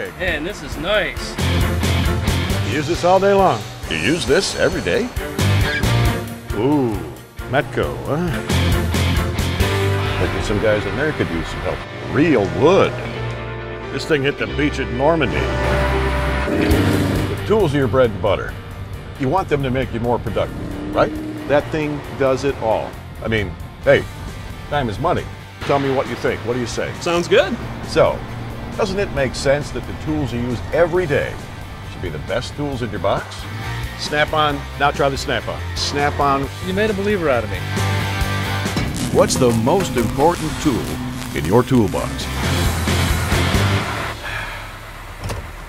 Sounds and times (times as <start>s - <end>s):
Music: 0.0s - 45.6s
Speech: 6.6s - 8.4s, 10.2s - 13.1s, 17.5s - 18.6s, 19.2s - 24.1s, 24.7s - 28.2s, 28.8s - 33.4s, 34.0s - 37.6s, 39.1s - 42.3s.